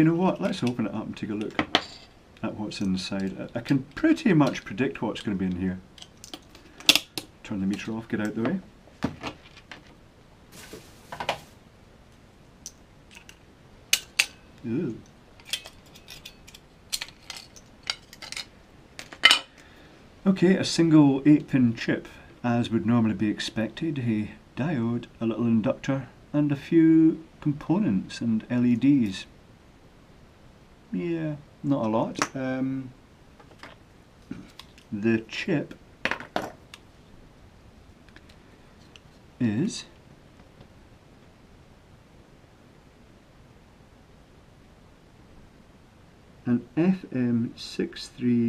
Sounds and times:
Cutlery, silverware: 0:13.9 - 0:14.4.

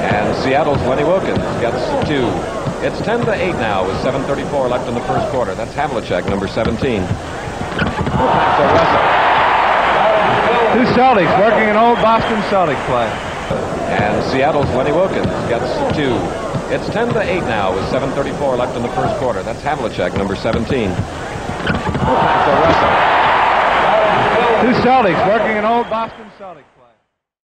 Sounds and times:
Speech: 0:00.0 - 0:09.1, 0:10.0 - 0:13.2, 0:13.8 - 0:21.4, 0:22.1 - 0:23.0, 0:23.9 - 0:27.0.

